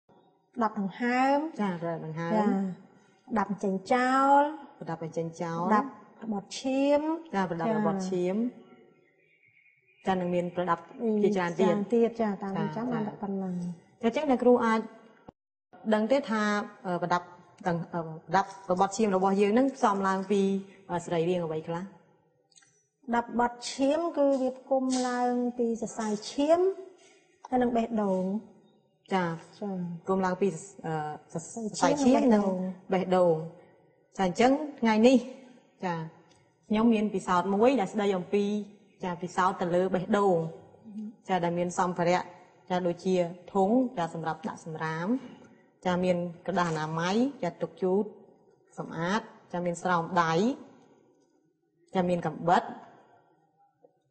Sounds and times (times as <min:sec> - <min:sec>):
Speech: 0:00.6 - 0:02.8, 0:03.4 - 0:08.5, 0:10.1 - 0:14.9, 0:15.8 - 0:21.9, 0:23.1 - 0:26.8, 0:27.5 - 0:28.4, 0:29.1 - 0:33.5, 0:34.2 - 0:36.1, 0:36.7 - 0:45.3, 0:45.9 - 0:48.1, 0:48.8 - 0:50.6, 0:52.0 - 0:52.8.